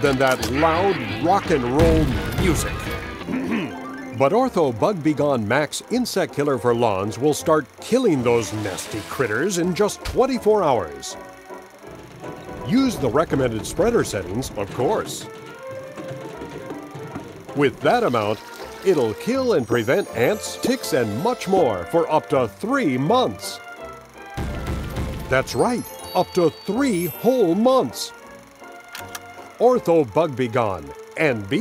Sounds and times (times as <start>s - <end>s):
Speech: 0.0s - 2.8s, 3.6s - 11.2s, 12.7s - 15.3s, 17.6s - 23.6s, 25.3s - 28.1s, 29.6s - 31.6s
Music: 0.0s - 31.6s.